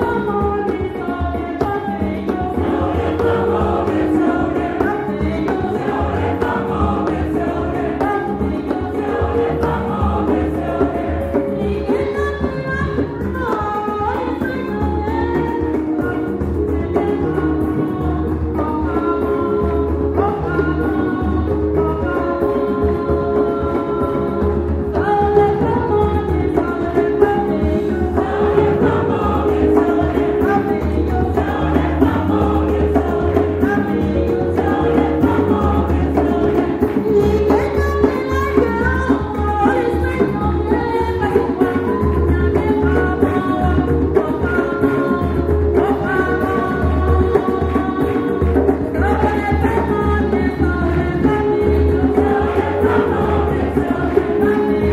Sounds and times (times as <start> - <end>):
Music: 0.0 - 54.9.